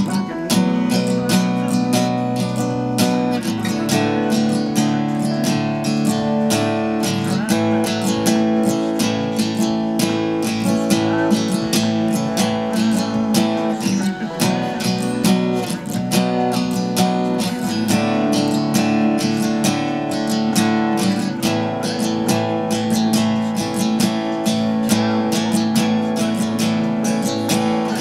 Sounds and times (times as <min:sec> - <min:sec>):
Acoustic guitar: 0:00.0 - 0:28.0
Strum: 0:00.0 - 0:28.0.